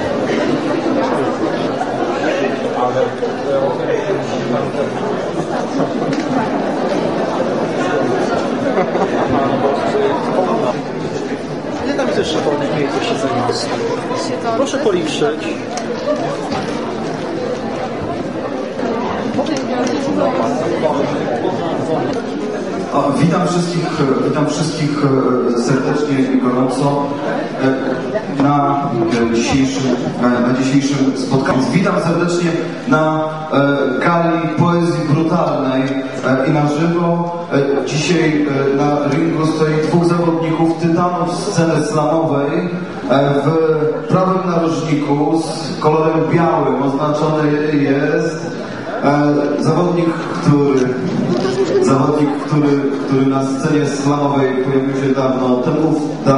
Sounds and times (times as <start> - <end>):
Speech: 0.0 - 6.6, 18.8 - 56.3.